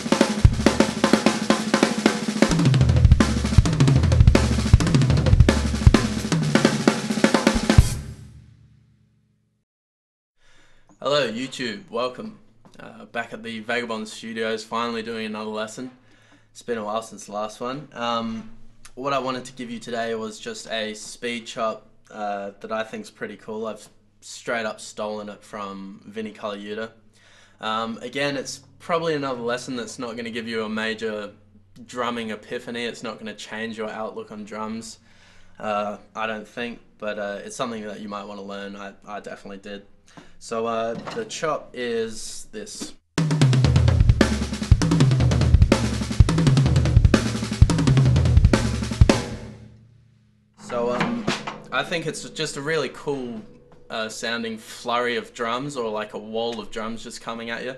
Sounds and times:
Speech: 11.0s - 16.0s, 16.6s - 27.0s, 27.6s - 35.0s, 35.6s - 43.0s, 50.6s - 57.7s.

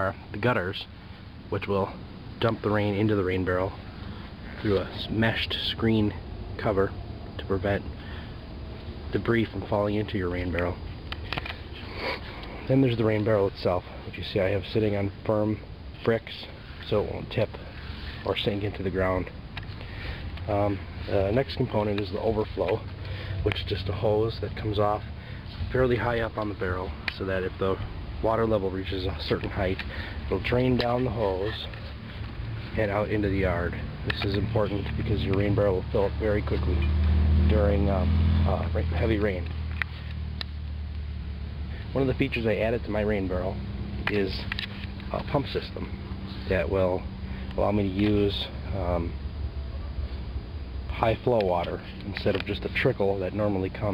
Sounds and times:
Speech: 0.0s - 0.9s, 1.5s - 3.8s, 4.6s - 7.9s, 9.1s - 10.8s, 12.6s - 17.6s, 18.2s - 19.3s, 20.5s - 31.8s, 32.7s - 36.9s, 37.5s - 39.5s, 41.9s - 44.5s, 45.1s - 49.2s, 50.9s - 53.9s.

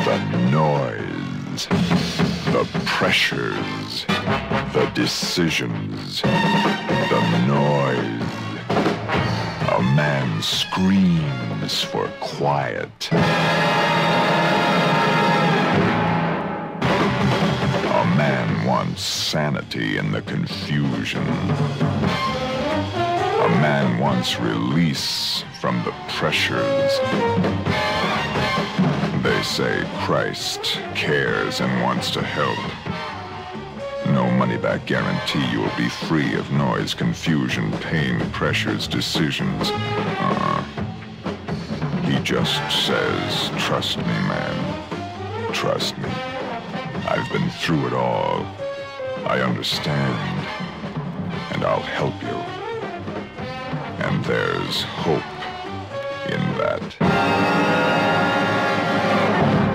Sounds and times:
Speech: 0.0s - 4.2s, 4.8s - 8.3s, 9.6s - 13.2s, 17.9s - 21.6s, 23.3s - 27.2s, 29.2s - 32.8s, 34.0s - 40.7s, 42.0s - 44.8s, 45.4s - 46.2s, 47.0s - 48.5s, 49.2s - 50.4s, 51.5s - 52.5s, 54.0s - 55.3s, 56.2s - 57.0s
Music: 0.0s - 59.7s.

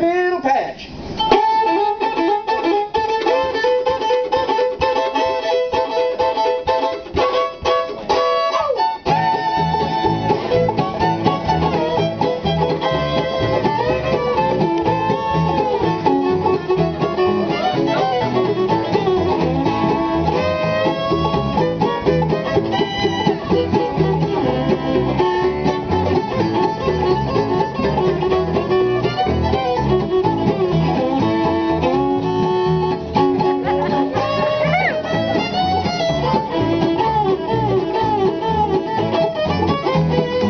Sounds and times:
Pizzicato: 1.4s - 40.4s.

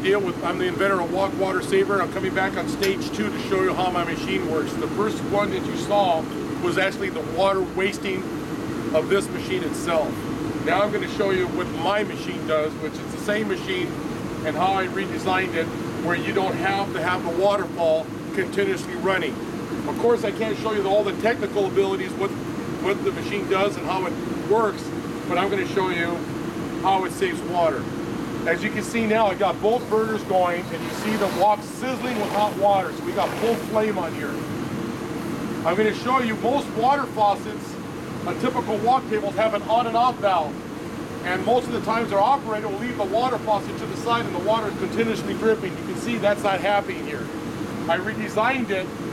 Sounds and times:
Speech: 0.0s - 8.3s, 9.0s - 34.4s, 35.6s - 40.6s, 41.2s - 47.3s, 47.9s - 48.9s.

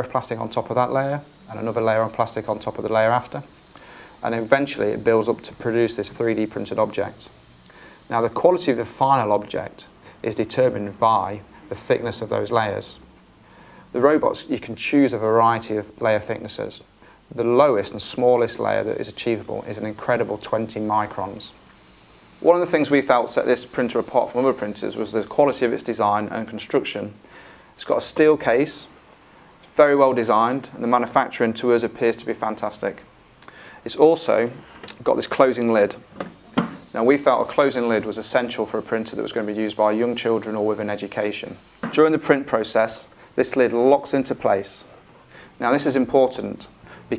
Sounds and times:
Speech: 0.0s - 3.5s, 4.2s - 7.4s, 8.1s - 13.1s, 13.9s - 21.6s, 22.4s - 27.2s, 27.8s - 29.0s, 29.6s - 33.1s, 33.8s - 36.1s, 36.9s - 45.0s, 45.6s - 47.1s.

